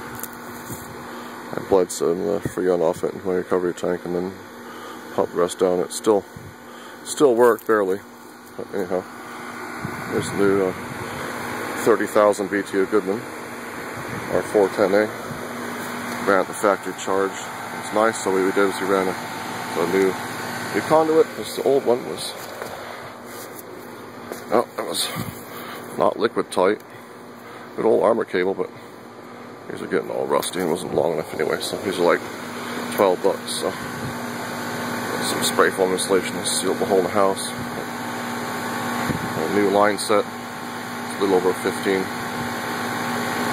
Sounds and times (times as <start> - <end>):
Air conditioning: 0.0 - 43.5
Speech: 1.5 - 4.4, 5.2 - 6.3, 7.0 - 9.1, 10.1 - 10.8, 11.8 - 13.3, 14.3 - 15.2, 16.2 - 22.4, 24.5 - 25.3, 26.0 - 26.9, 27.8 - 28.7, 29.7 - 32.3, 32.9 - 33.9, 35.1 - 37.7, 39.4 - 40.3, 41.1 - 42.2.